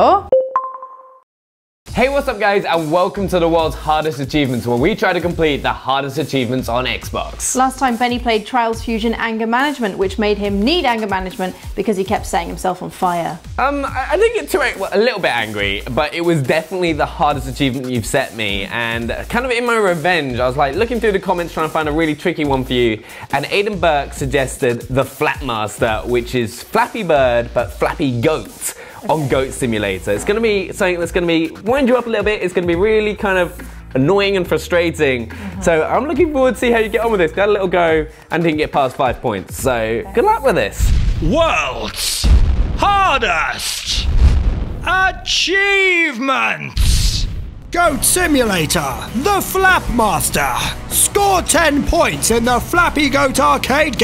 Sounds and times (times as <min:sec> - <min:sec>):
Speech: 0:02.0 - 0:44.1, 0:44.9 - 0:47.2, 0:47.8 - 0:54.0.